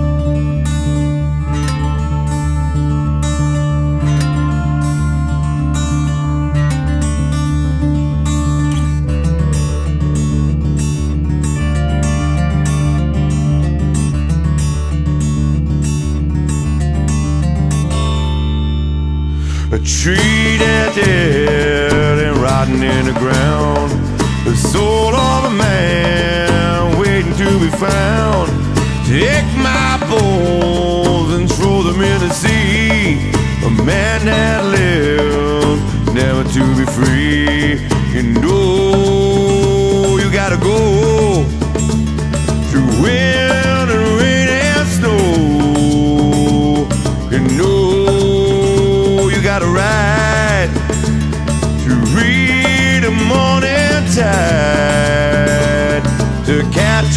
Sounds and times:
Music: 0:00.0 - 0:57.1.

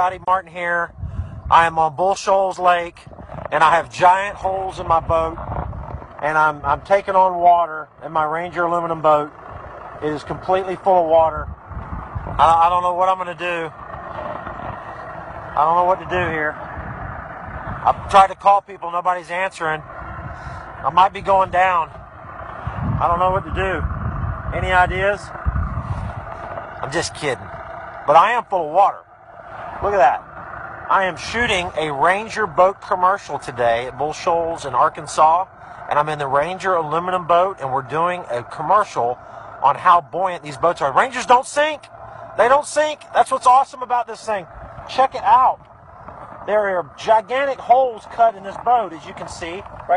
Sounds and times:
Speech: 0:00.0 - 0:00.9, 0:01.5 - 0:05.4, 0:06.2 - 0:09.3, 0:10.0 - 0:11.5, 0:12.4 - 0:13.7, 0:15.6 - 0:16.6, 0:17.8 - 0:19.8, 0:20.8 - 0:21.9, 0:23.0 - 0:23.9, 0:24.5 - 0:25.3, 0:26.8 - 0:27.5, 0:28.1 - 0:29.0, 0:29.8 - 0:30.2, 0:30.9 - 0:45.6, 0:46.5 - 0:49.9
Motorboat, speedboat: 0:00.0 - 0:49.9.

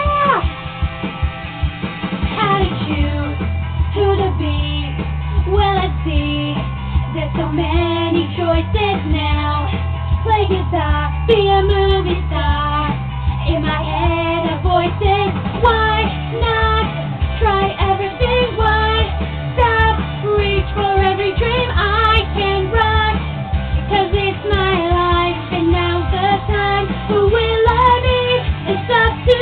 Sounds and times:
Music: 0:00.0 - 0:29.4
Female singing: 0:02.4 - 0:23.2, 0:23.9 - 0:29.4.

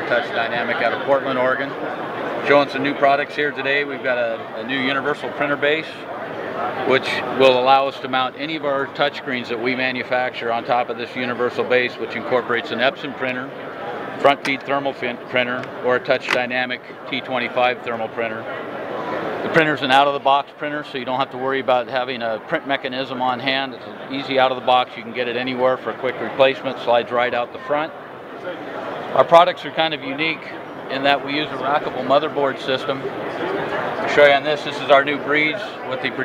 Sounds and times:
Speech: 0:00.0 - 0:01.8, 0:02.4 - 0:13.6, 0:14.2 - 0:18.6, 0:19.4 - 0:36.2.

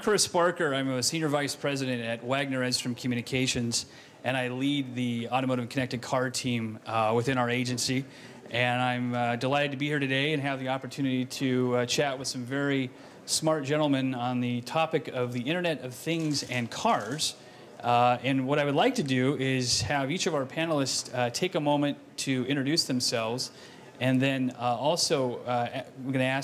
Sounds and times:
Speech: 0:00.0 - 0:26.4.

